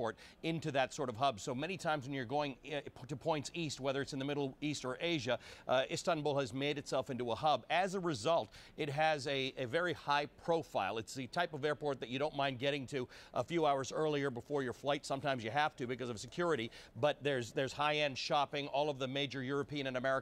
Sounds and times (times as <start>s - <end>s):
Speech: 0.0s - 20.2s.